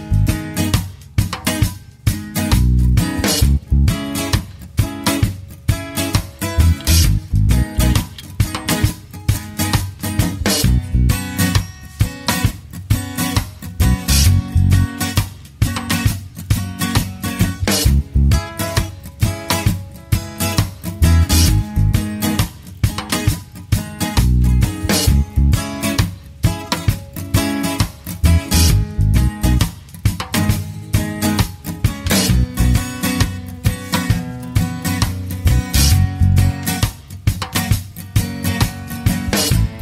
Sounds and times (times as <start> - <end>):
Music: 0.0 - 39.8.